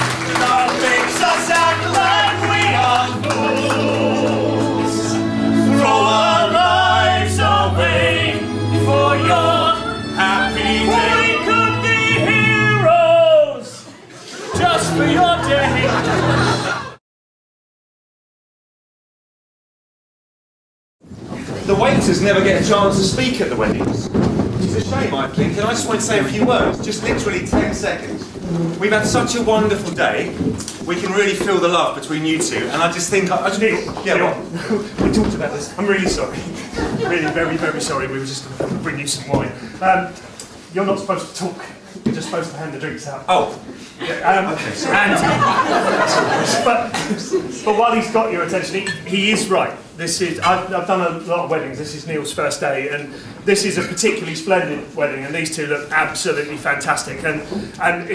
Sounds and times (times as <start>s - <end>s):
Music: 0.0s - 17.0s
Male singing: 0.4s - 13.8s.